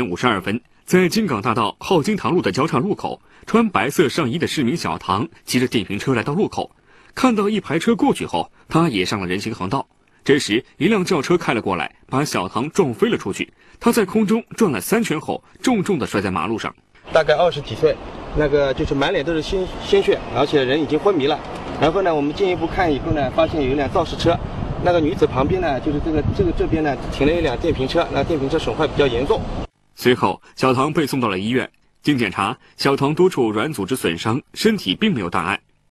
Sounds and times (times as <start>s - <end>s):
Speech: 0.0s - 29.4s, 30.0s - 35.6s.